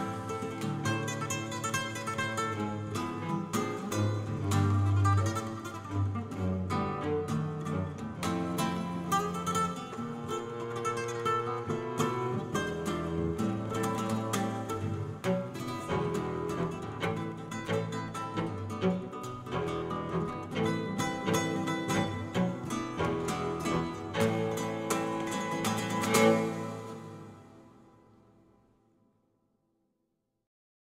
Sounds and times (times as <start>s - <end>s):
Cello: 0.0s - 28.2s
Flamenco: 0.0s - 28.2s
Guitar: 0.0s - 28.9s.